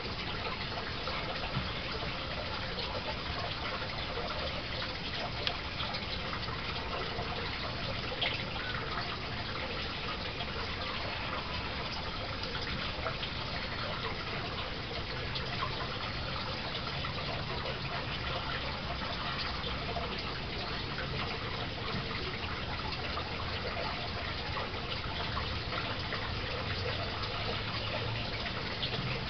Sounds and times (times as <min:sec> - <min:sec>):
Water: 0:00.0 - 0:29.2.